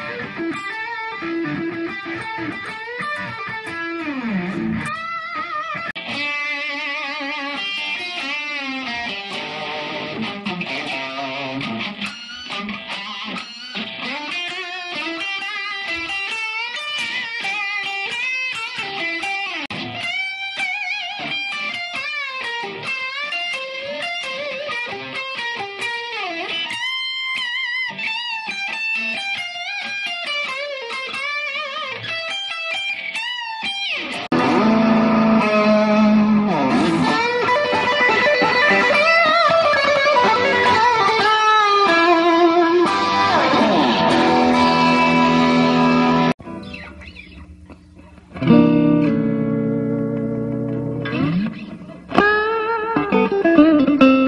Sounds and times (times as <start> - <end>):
Electric guitar: 0.0 - 54.2.